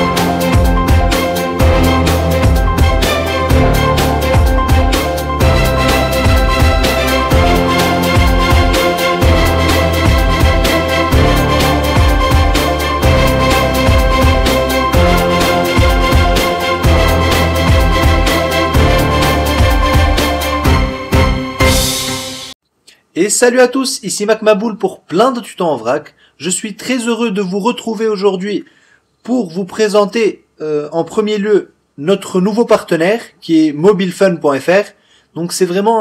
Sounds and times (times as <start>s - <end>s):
Speech: 22.9s - 36.0s.